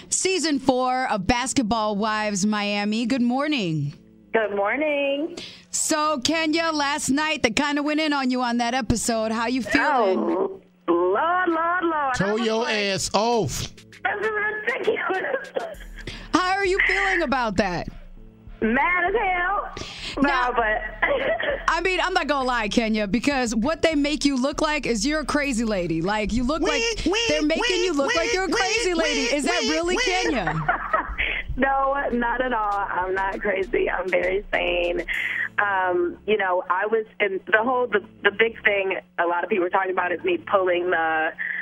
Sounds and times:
Speech: 21.8 - 30.6.

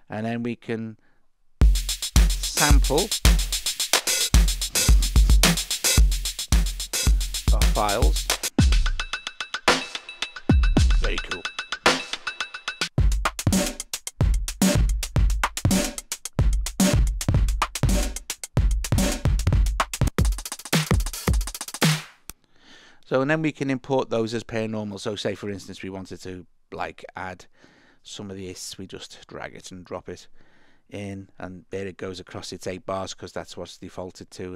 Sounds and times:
Speech: 0.0 - 1.0, 2.5 - 3.1, 7.5 - 8.2, 10.9 - 11.5, 23.0 - 27.5, 28.1 - 30.3, 30.9 - 34.5
Drum machine: 1.6 - 22.2.

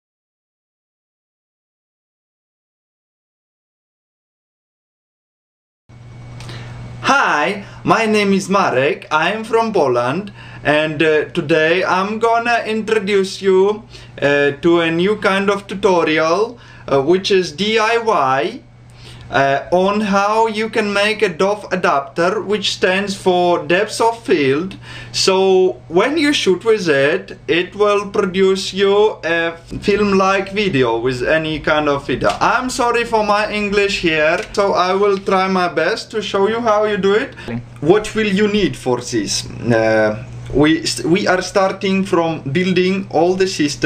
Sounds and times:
Speech: 7.0 - 18.7, 19.3 - 43.8.

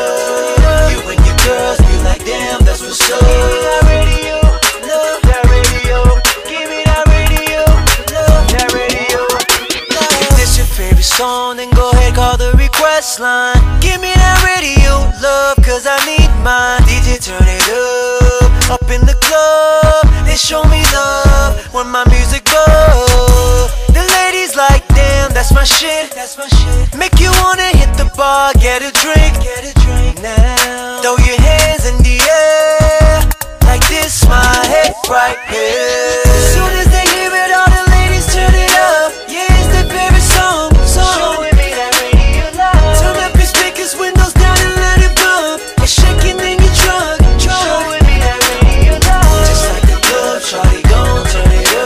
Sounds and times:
Music: 0.0 - 51.8.

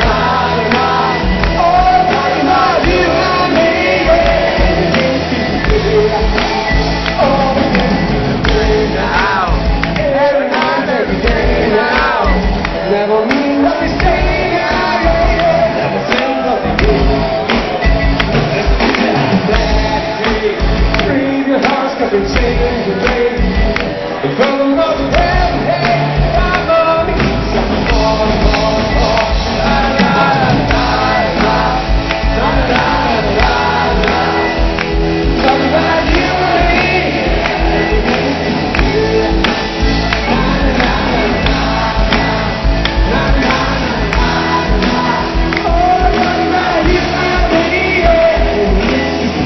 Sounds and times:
Inside, public space: 0.0 - 49.4
Music: 0.0 - 49.4
Singing: 0.0 - 49.4.

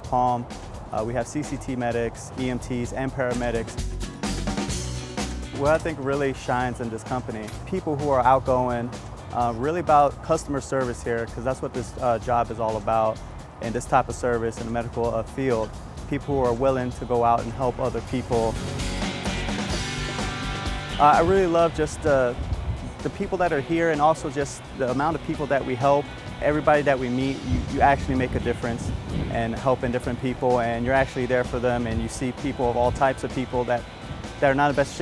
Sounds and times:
Speech: 0.0 - 3.7, 5.6 - 18.6, 21.0 - 22.4, 23.0 - 33.8, 34.4 - 35.0
Music: 0.0 - 35.0.

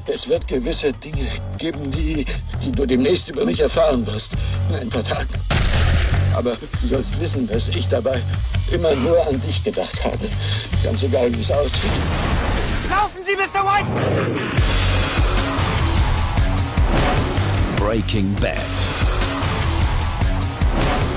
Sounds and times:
Music: 0.0 - 21.1
Speech: 17.8 - 18.9.

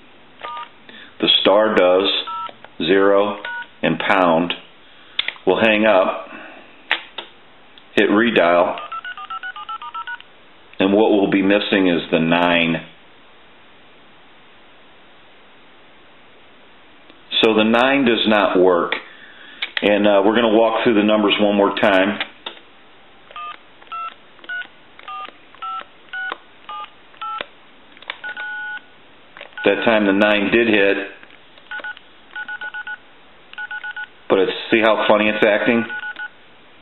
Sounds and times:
Inside, small room: 0.0 - 36.8
Speech: 1.2 - 4.7, 5.5 - 6.5, 8.0 - 8.9, 10.8 - 13.0, 17.3 - 19.0, 19.8 - 22.3, 29.7 - 31.2, 34.3 - 36.0
Telephone dialing, DTMF: 2.3 - 2.5, 3.5 - 3.7, 8.8 - 10.2, 23.4 - 27.4, 28.2 - 28.8, 31.7 - 33.0, 33.6 - 34.1, 35.9 - 36.3.

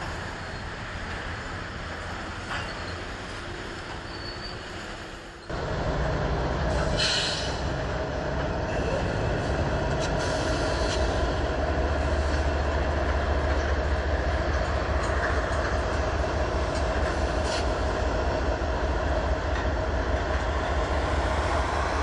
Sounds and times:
Railroad car, train wagon: 0.0 - 22.0
Train: 0.0 - 22.0.

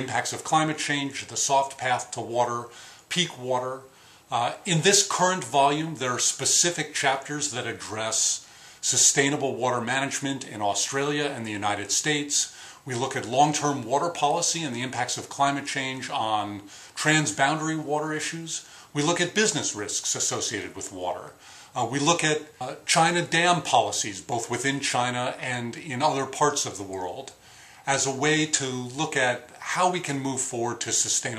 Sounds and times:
Speech: 0.0 - 31.3.

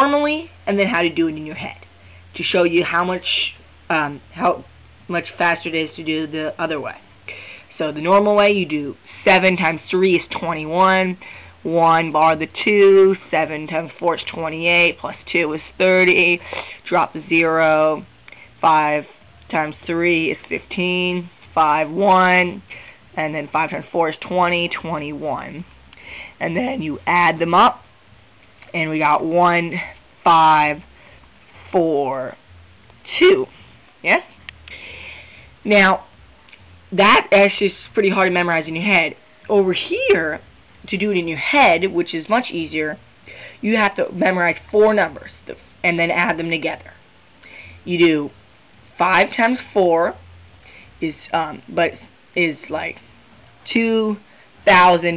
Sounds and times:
Speech: 0.0 - 7.0, 7.7 - 18.0, 18.6 - 22.6, 23.2 - 25.6, 26.4 - 27.8, 28.7 - 30.8, 31.7 - 32.4, 33.1 - 34.3, 35.7 - 36.1, 36.9 - 43.0, 43.6 - 47.0, 47.9 - 48.3, 49.0 - 50.2, 51.0 - 53.0, 53.6 - 55.1.

